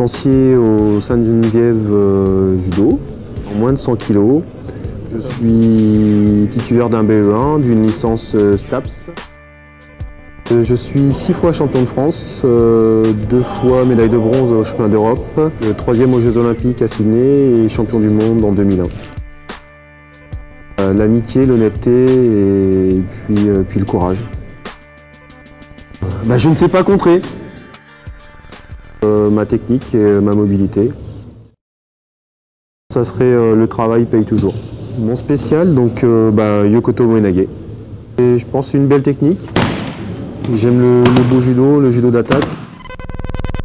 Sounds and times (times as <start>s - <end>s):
Speech: 0.0s - 4.5s, 5.1s - 9.2s, 10.5s - 19.0s, 20.8s - 24.3s, 26.0s - 27.3s, 29.0s - 31.0s, 32.9s - 37.5s, 38.2s - 39.5s, 40.5s - 42.5s
Music: 0.0s - 31.6s, 39.0s - 43.6s.